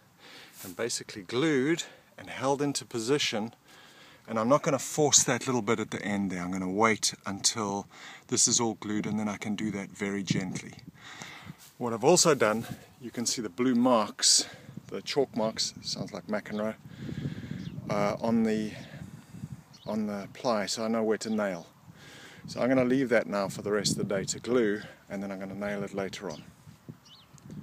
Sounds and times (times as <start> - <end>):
Speech: 0.6 - 3.6, 4.3 - 10.8, 11.8 - 16.8, 17.9 - 19.0, 19.9 - 21.7, 22.5 - 26.5.